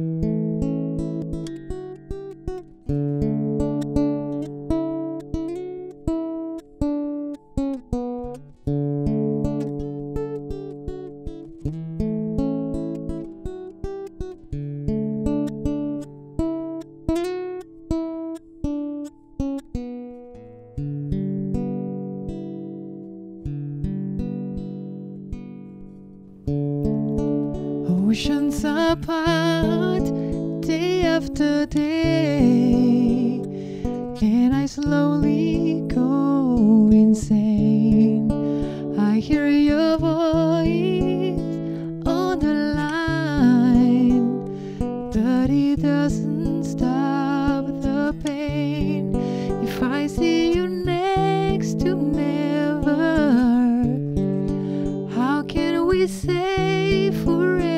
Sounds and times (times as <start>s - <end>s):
Electronic tuner: 0.0s - 57.7s
Music: 0.0s - 57.7s.